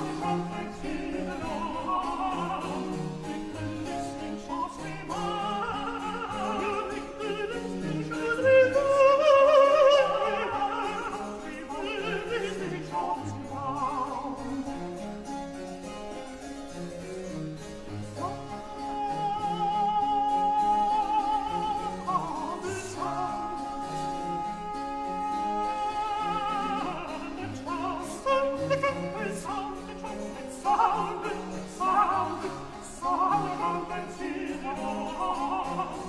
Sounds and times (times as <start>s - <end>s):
Music: 0.0s - 36.0s.